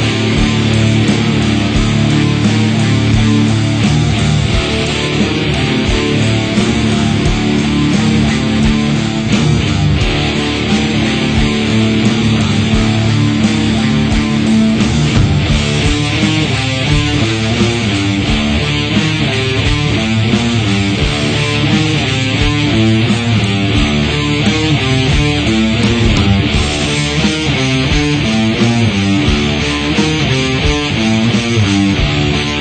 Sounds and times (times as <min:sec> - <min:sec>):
Music: 0:00.0 - 0:32.6.